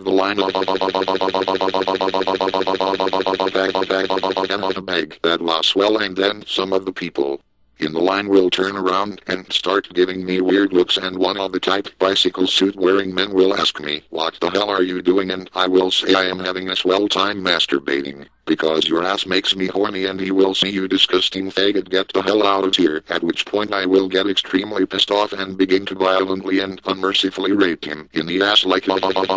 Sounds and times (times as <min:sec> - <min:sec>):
Speech: 0:00.0 - 0:29.3.